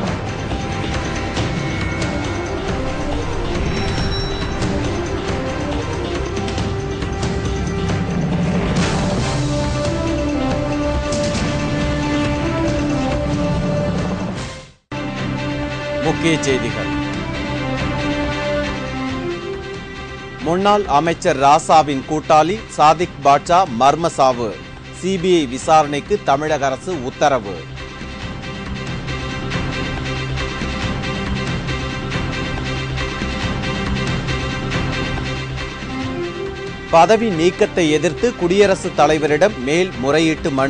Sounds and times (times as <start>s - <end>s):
Music: 0.0s - 40.6s
Speech: 16.0s - 16.9s, 20.4s - 27.6s, 37.0s - 40.6s.